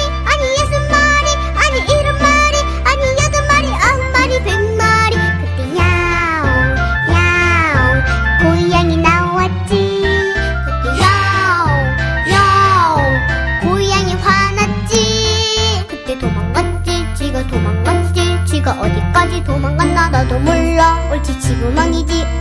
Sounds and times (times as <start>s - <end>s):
Music for children: 0.0s - 22.4s.